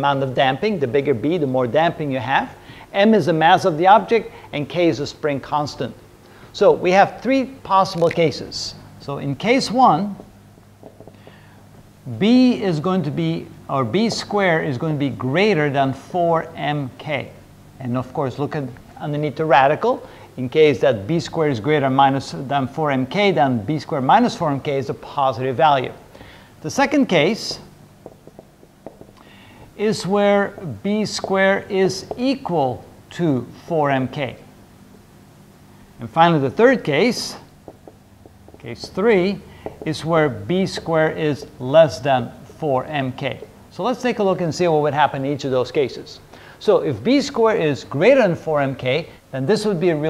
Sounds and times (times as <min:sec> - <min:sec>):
Speech: 0:00.0 - 0:10.3, 0:12.1 - 0:26.0, 0:26.6 - 0:27.7, 0:29.8 - 0:34.5, 0:36.0 - 0:37.5, 0:38.6 - 0:50.0.